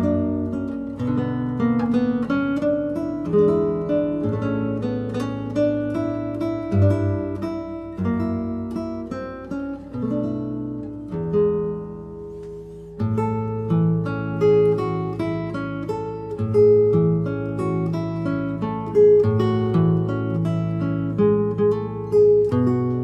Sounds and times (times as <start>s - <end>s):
Acoustic guitar: 0.0s - 23.0s
Strum: 0.0s - 23.0s.